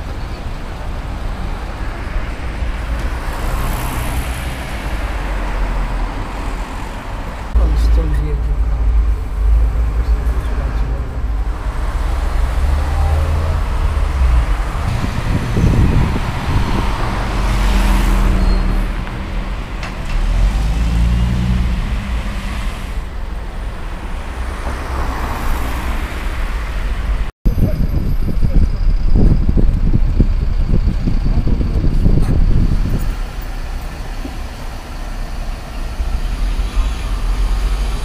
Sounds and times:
Bus: 0.0 - 38.0.

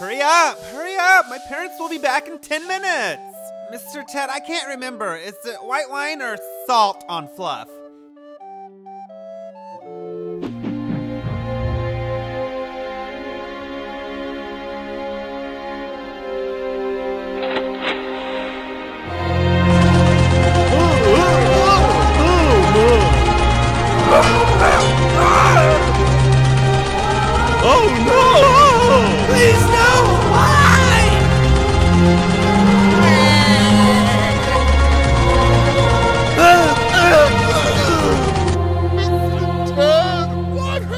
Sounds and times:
Speech: 0.0 - 7.8, 20.7 - 23.1, 27.6 - 31.2, 36.4 - 38.3, 39.0 - 40.9
Music: 0.0 - 40.9.

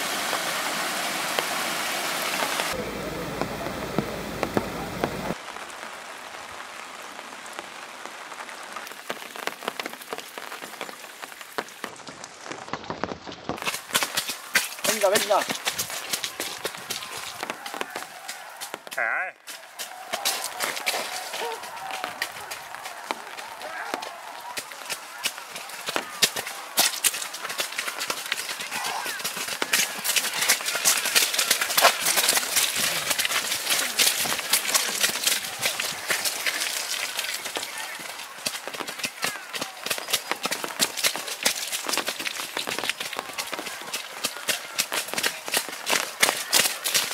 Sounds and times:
Outside, rural or natural: 0.0 - 47.1
Run: 7.5 - 47.1.

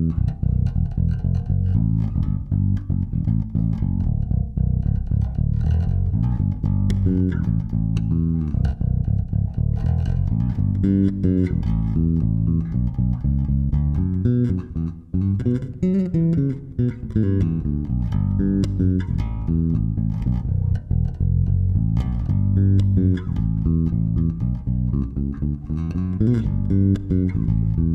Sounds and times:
Bass guitar: 0.0 - 27.9
Strum: 0.0 - 27.9.

